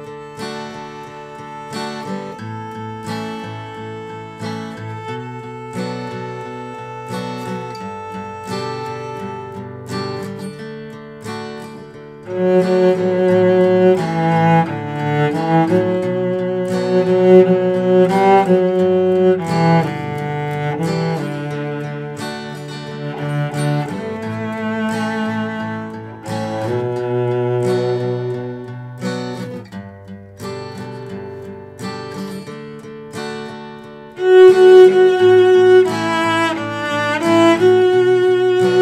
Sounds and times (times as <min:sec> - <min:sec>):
Acoustic guitar: 0:00.0 - 0:38.8
Strum: 0:00.0 - 0:38.8.